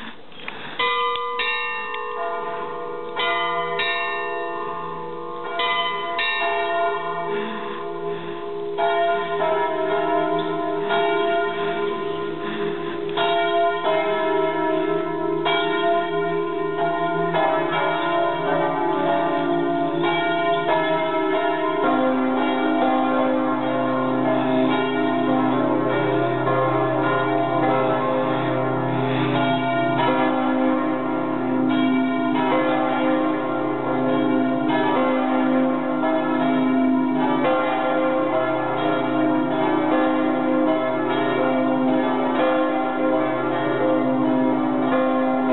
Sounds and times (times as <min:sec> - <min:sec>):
Church bell: 0:00.8 - 0:45.5.